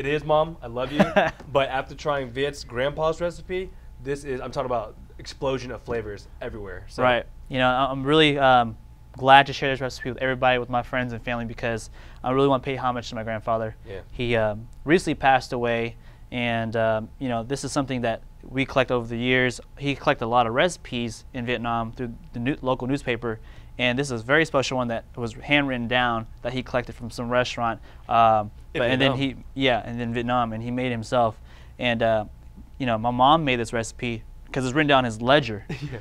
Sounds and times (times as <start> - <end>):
Speech: 0.0 - 35.7.